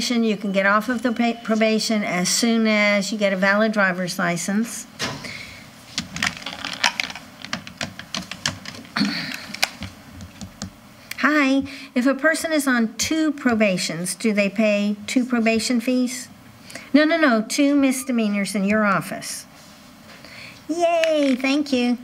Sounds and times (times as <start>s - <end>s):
Speech: 0.0s - 4.9s, 11.2s - 16.3s, 17.0s - 19.5s, 20.7s - 22.0s.